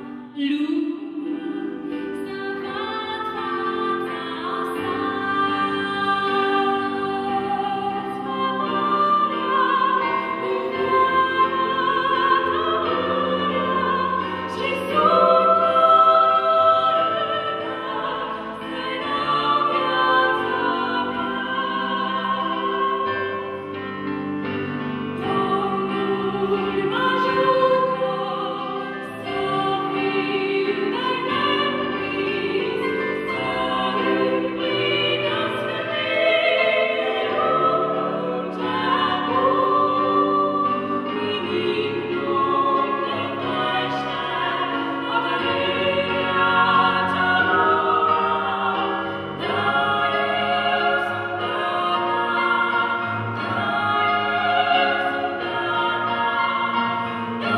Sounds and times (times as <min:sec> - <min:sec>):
Choir: 0:00.0 - 0:57.5.